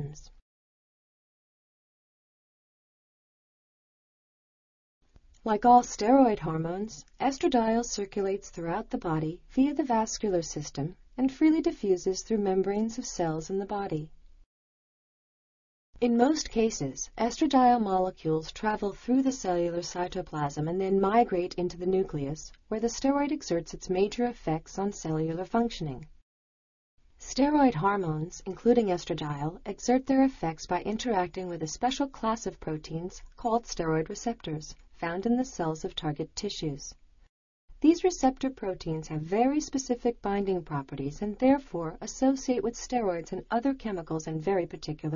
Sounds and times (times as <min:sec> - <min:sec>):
Speech: 0:00.0 - 0:00.4, 0:05.4 - 0:14.1, 0:16.0 - 0:26.1, 0:27.2 - 0:37.0, 0:37.8 - 0:45.1.